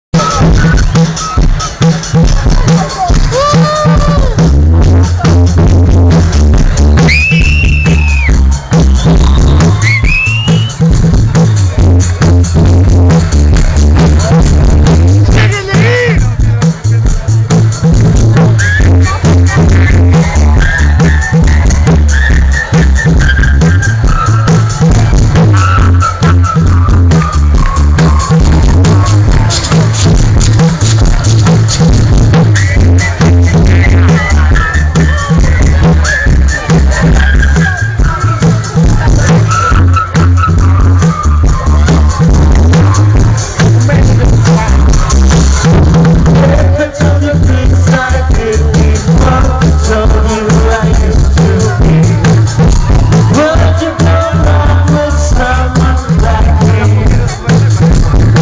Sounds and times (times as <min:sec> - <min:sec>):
Rock music: 0:00.1 - 0:58.4
Independent music: 0:00.2 - 0:58.4.